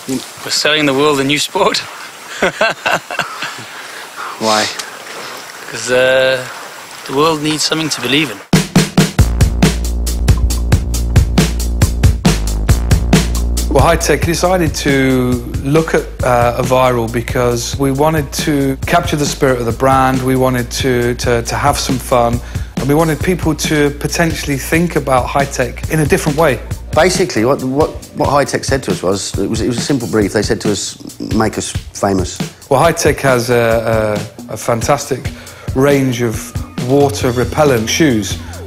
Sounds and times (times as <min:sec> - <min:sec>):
Speech: 0:00.0 - 0:01.9, 0:04.4 - 0:04.8, 0:05.7 - 0:06.5, 0:07.1 - 0:08.5, 0:13.7 - 0:38.6
Music: 0:08.5 - 0:38.6.